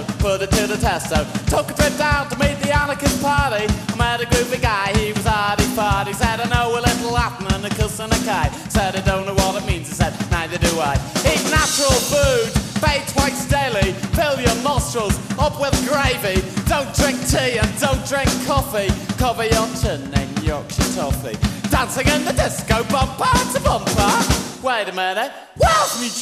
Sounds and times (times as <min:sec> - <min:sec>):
Reggae: 0:00.0 - 0:24.8.